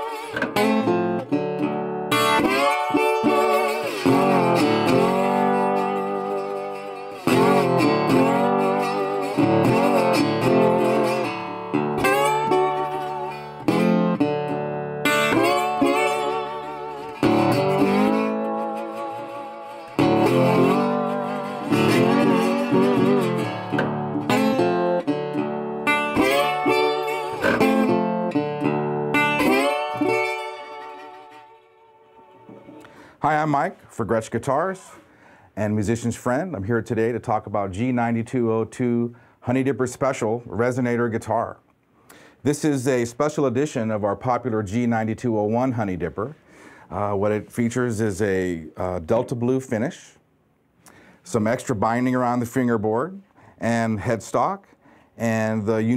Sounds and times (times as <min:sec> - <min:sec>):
Strum: 0:00.0 - 0:49.5
Acoustic guitar: 0:00.0 - 0:50.0, 0:50.6 - 0:55.9
Speech: 0:33.2 - 0:35.0, 0:35.6 - 0:41.6, 0:42.4 - 0:50.2, 0:51.2 - 0:55.9.